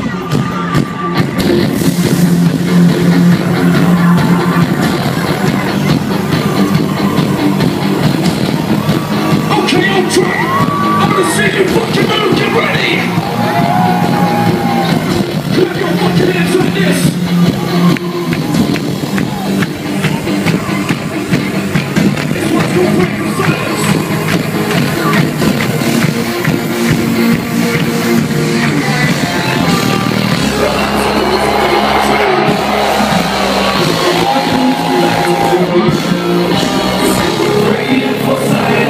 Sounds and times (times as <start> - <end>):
Background music: 0.0 - 38.8.